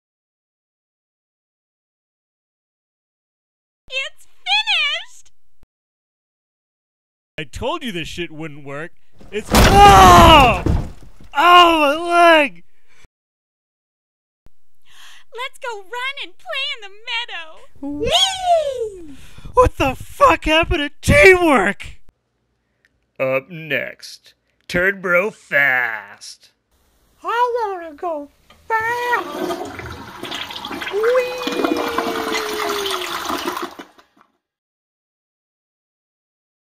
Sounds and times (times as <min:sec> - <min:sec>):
Speech: 0:07.4 - 0:10.7, 0:11.4 - 0:12.6, 0:15.4 - 0:18.5, 0:19.6 - 0:22.0, 0:23.2 - 0:26.6, 0:27.2 - 0:29.4
Toilet flush: 0:29.0 - 0:34.2.